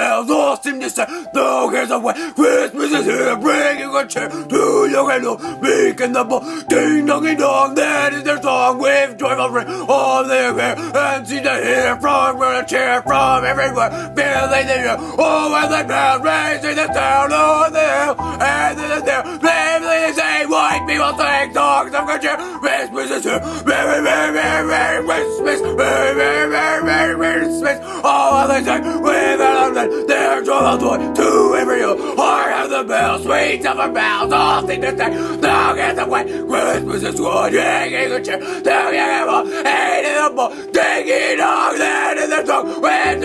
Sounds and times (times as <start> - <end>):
Music: 0.0 - 43.2.